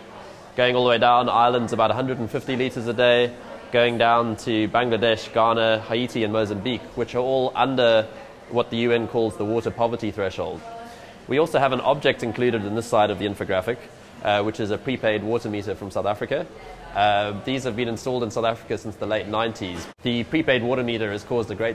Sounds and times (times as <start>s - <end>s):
Speech: 0.0s - 21.7s.